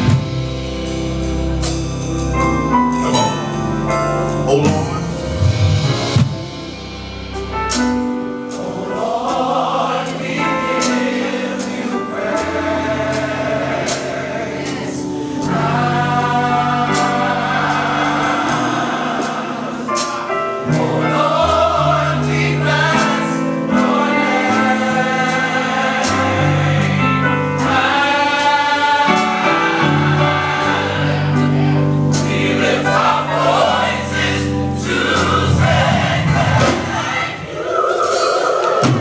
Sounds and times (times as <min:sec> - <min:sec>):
Choir: 0:08.4 - 0:39.0.